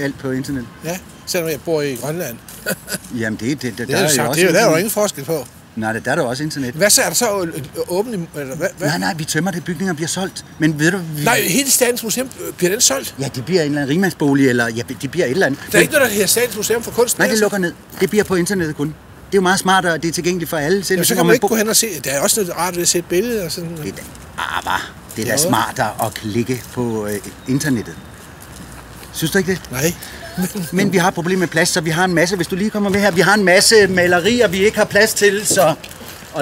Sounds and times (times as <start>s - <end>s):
Speech: 3.1s - 28.0s, 29.2s - 36.4s.